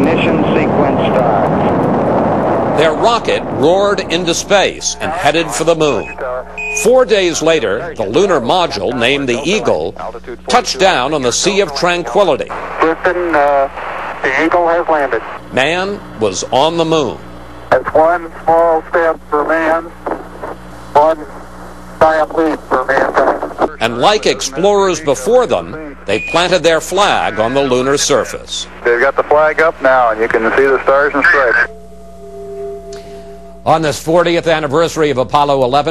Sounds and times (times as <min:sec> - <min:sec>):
Speech: 0:00.0 - 0:01.5, 0:02.8 - 0:17.2, 0:17.8 - 0:20.0, 0:21.0 - 0:21.4, 0:22.0 - 0:31.7, 0:33.7 - 0:35.9.